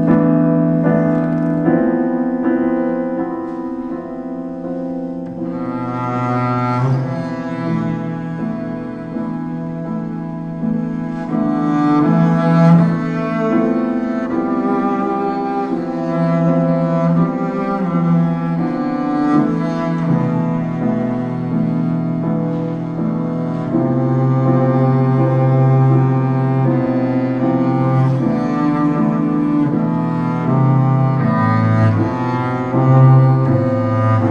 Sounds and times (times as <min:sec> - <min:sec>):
Cello: 0:00.0 - 0:34.3
Classical music: 0:00.0 - 0:34.3.